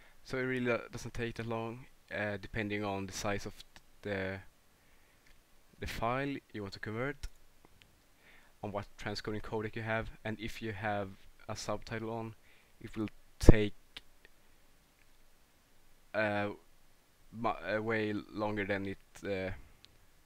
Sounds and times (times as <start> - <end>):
Speech: 0.3 - 4.5, 5.8 - 7.3, 8.6 - 13.8, 16.2 - 16.6, 17.4 - 19.6.